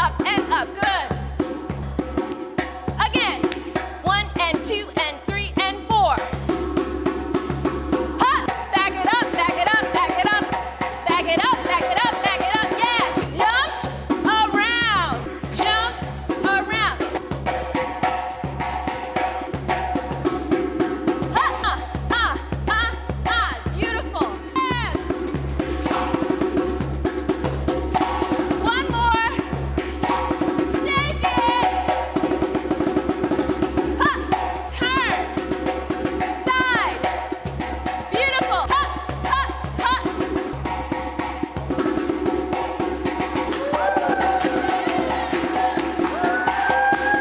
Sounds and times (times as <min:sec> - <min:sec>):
Music: 0:00.0 - 0:47.2.